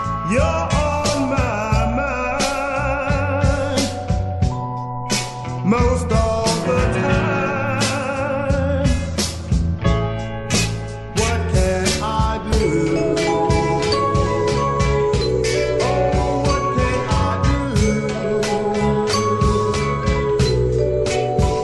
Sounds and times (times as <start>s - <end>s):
Music: 0.0s - 21.6s.